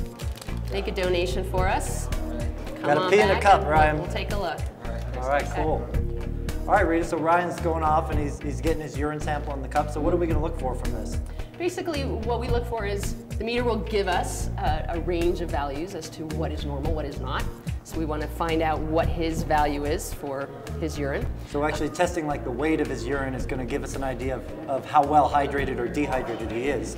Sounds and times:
Music: 0.0s - 26.9s.

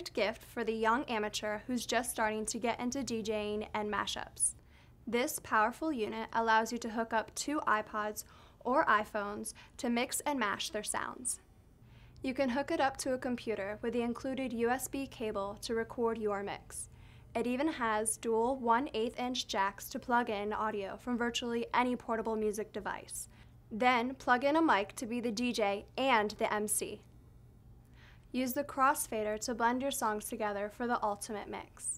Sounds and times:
Speech: 0.0s - 11.4s, 12.2s - 27.0s, 28.3s - 31.9s.

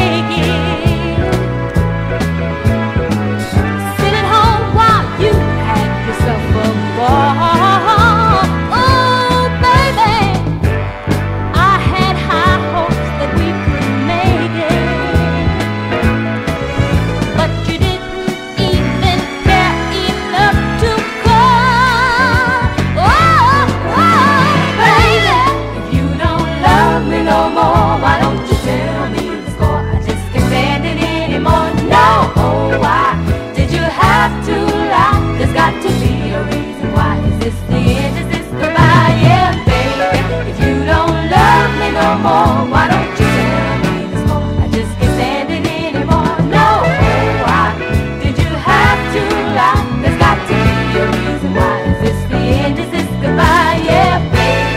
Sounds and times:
Soul music: 0.0s - 54.7s.

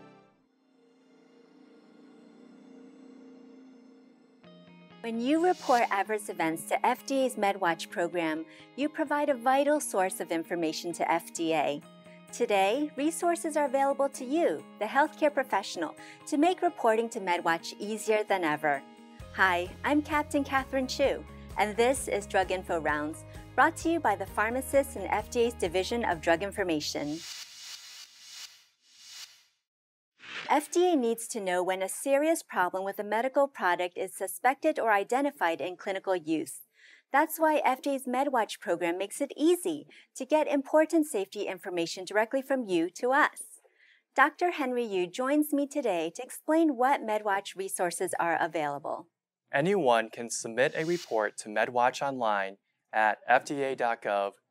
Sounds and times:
Speech: 5.1s - 11.8s, 12.4s - 18.8s, 19.4s - 27.2s, 30.5s - 36.6s, 37.2s - 43.6s, 44.2s - 49.0s, 49.6s - 54.4s.

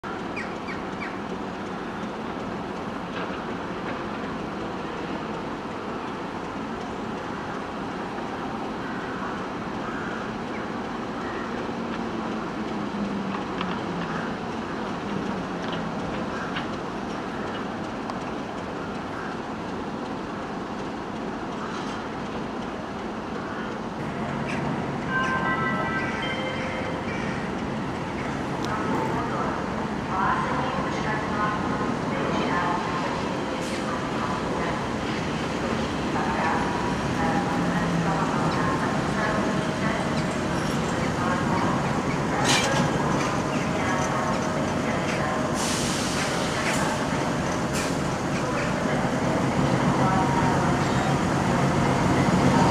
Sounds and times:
Railroad car, train wagon: 0.0s - 52.7s
Train: 0.0s - 52.7s.

